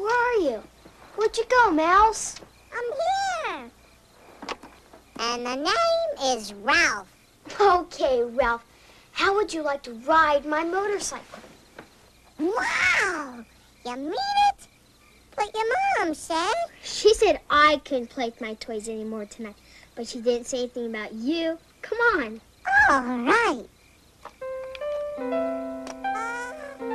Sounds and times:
Speech: 9.2 - 11.3, 15.4 - 23.7.

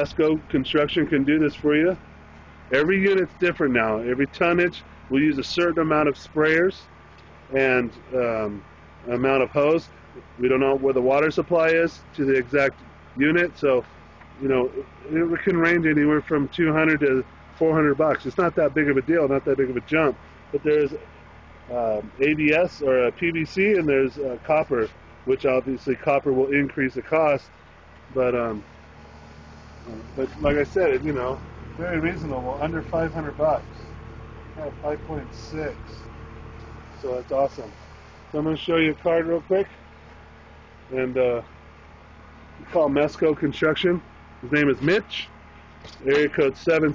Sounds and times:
Speech: 0.0 - 2.0, 2.7 - 6.9, 7.5 - 21.1, 21.7 - 27.5, 28.1 - 28.7, 29.8 - 33.9, 34.6 - 36.1, 37.0 - 39.8, 40.9 - 41.5, 42.6 - 45.3, 45.9 - 46.9.

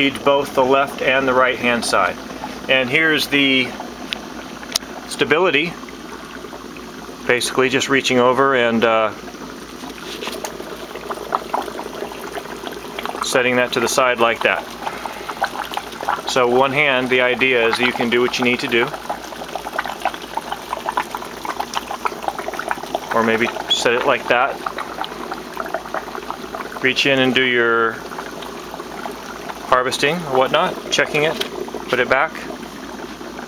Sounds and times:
Speech: 0.0 - 3.8, 5.1 - 5.8, 7.3 - 9.2, 13.2 - 14.6, 16.3 - 19.0, 23.1 - 24.6, 26.8 - 28.0, 29.7 - 32.5
Boiling: 0.0 - 33.4.

